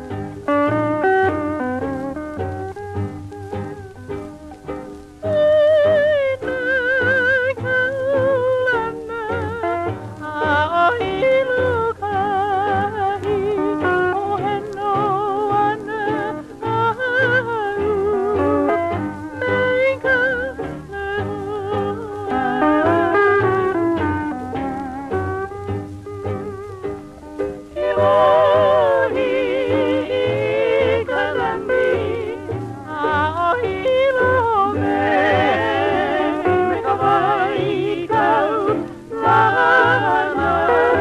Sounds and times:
Music: 0.0s - 41.0s.

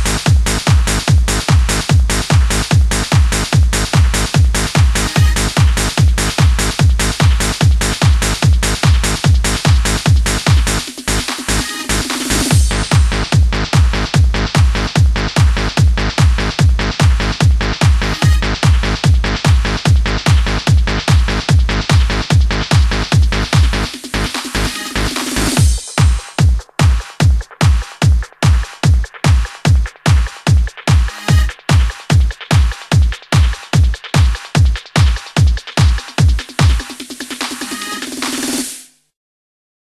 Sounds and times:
Music: 0.0s - 39.1s.

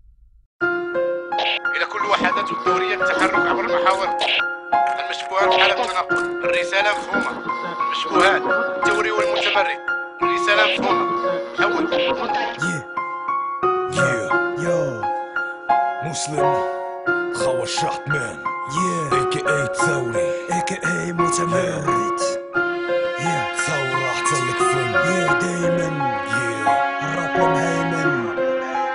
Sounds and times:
Music: 0.6s - 28.9s.

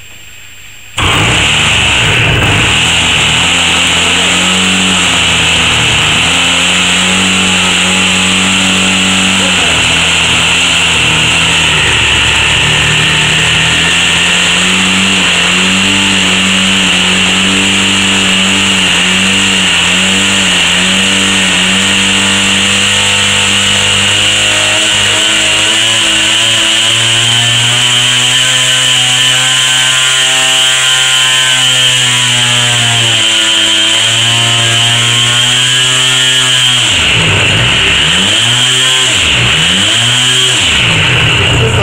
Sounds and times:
Accelerating, revving, vroom: 1.0s - 41.5s.

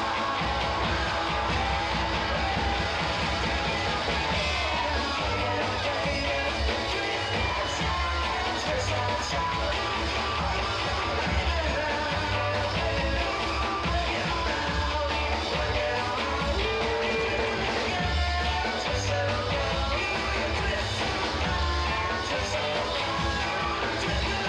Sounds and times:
Music: 0.0s - 24.4s.

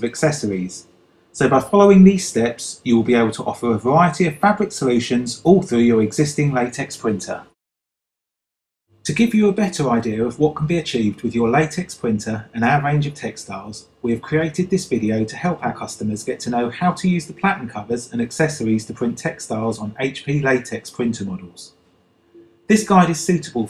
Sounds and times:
Speech: 0.0s - 7.6s, 9.1s - 21.7s, 22.7s - 23.7s.

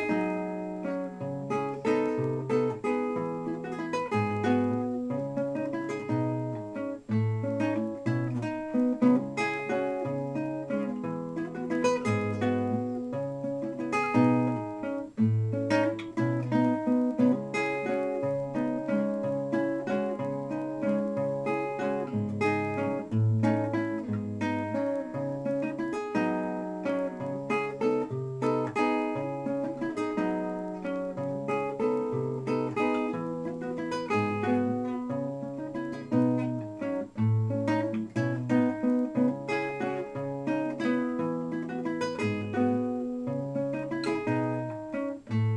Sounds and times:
Guitar: 0.0s - 45.5s.

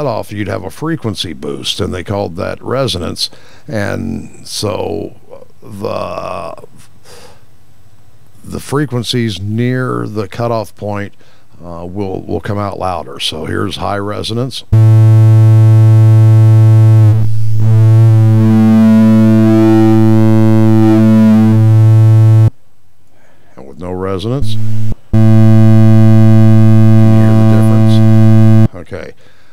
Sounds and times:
Speech: 0.0s - 6.9s, 8.4s - 14.7s, 23.5s - 24.6s, 27.0s - 29.2s
Inside, small room: 0.0s - 29.5s
Synthesizer: 14.8s - 22.5s.

